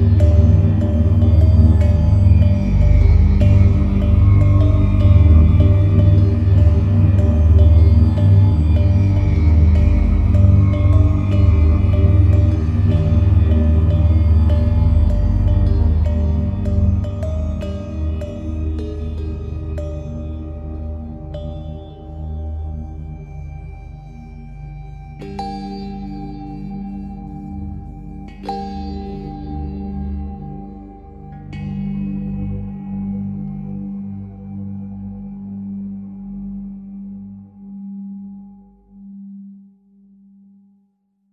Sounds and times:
Singing bowl: 0.0 - 39.8.

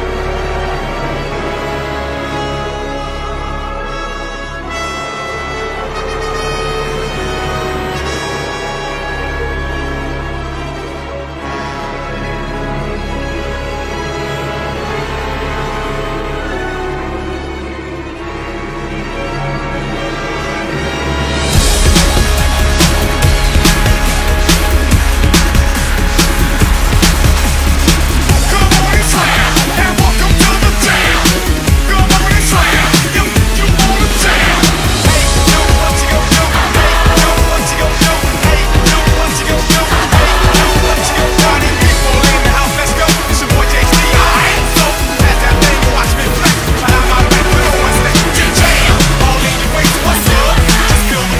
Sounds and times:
Music: 0.0 - 51.3.

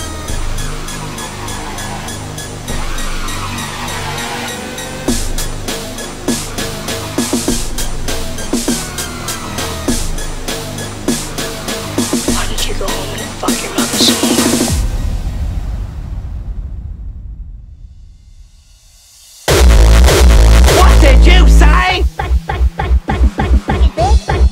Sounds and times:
Electronic dance music: 4.1 - 14.8, 19.5 - 24.5.

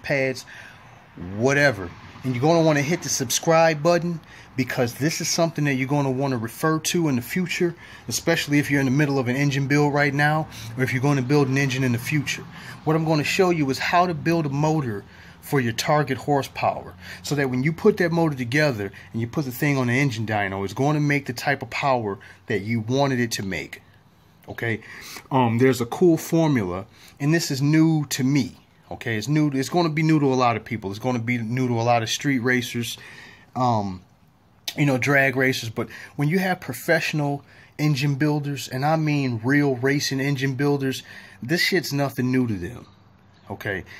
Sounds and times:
Speech: 0.0 - 0.5, 1.2 - 23.8, 24.5 - 33.0, 33.6 - 34.1, 34.7 - 43.9.

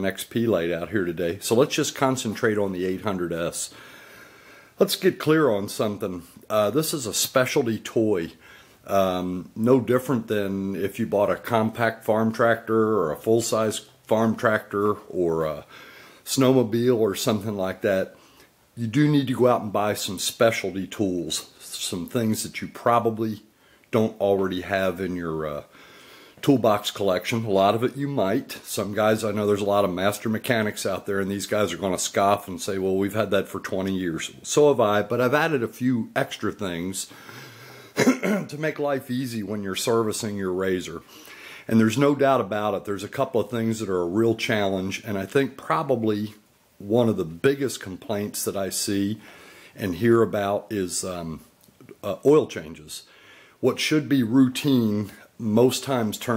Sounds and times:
Speech: 0.0 - 3.8, 4.8 - 18.2, 18.8 - 25.7, 26.4 - 37.1, 38.0 - 41.1, 41.7 - 49.2, 49.8 - 56.3.

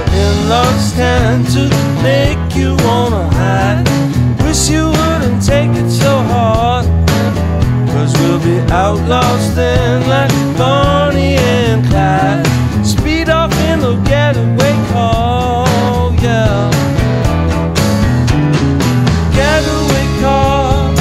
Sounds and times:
Music: 0.0 - 21.0.

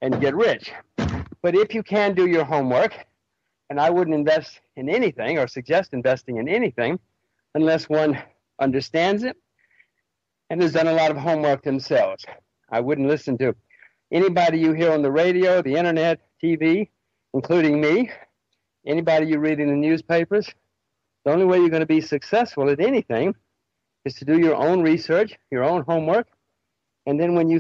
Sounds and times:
Speech: 0.0 - 3.1, 3.7 - 9.4, 10.5 - 20.6, 21.2 - 23.4, 24.0 - 26.4, 27.0 - 27.6.

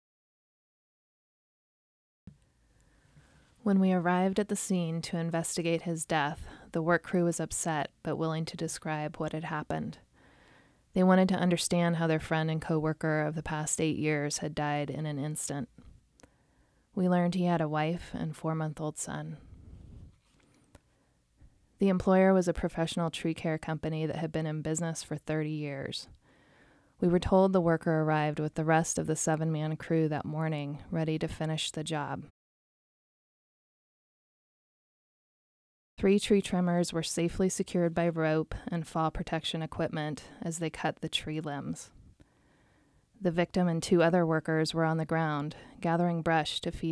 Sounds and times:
Speech: 3.6 - 10.0, 11.0 - 15.7, 17.0 - 19.4, 21.8 - 26.1, 27.0 - 32.3, 36.0 - 42.0, 43.2 - 46.9.

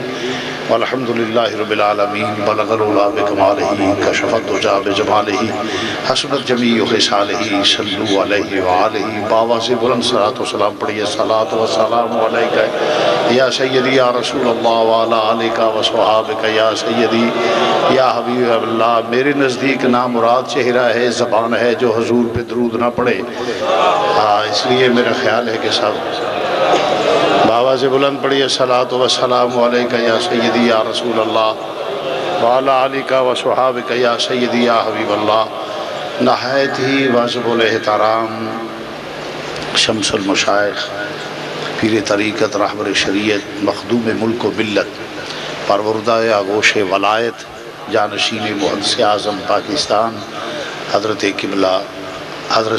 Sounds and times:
Male speech, man speaking: 0.0 - 26.8, 27.4 - 31.6, 32.3 - 35.6, 36.2 - 38.8, 39.6 - 45.0, 45.7 - 52.7
Narration, monologue: 0.0 - 52.7.

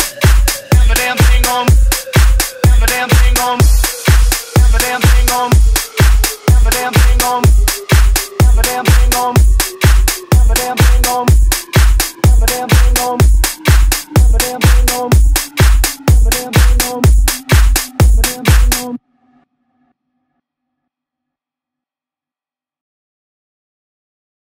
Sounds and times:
Rock music: 0.0 - 19.0.

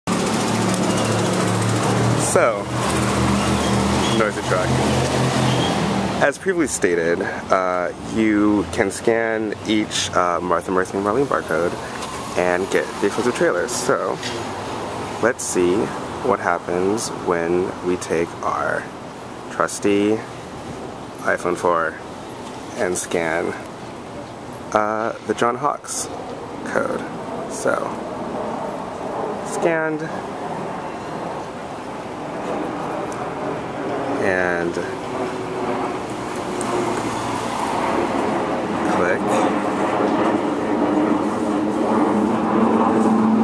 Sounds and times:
Outside, urban or manmade: 0.0 - 43.4
Speech: 2.2 - 2.7, 4.1 - 4.8, 6.2 - 11.8, 12.4 - 14.3, 15.2 - 18.9, 19.5 - 20.3, 21.2 - 22.0, 22.8 - 23.6, 24.7 - 28.0, 29.4 - 30.2, 34.2 - 35.0, 38.8 - 39.6.

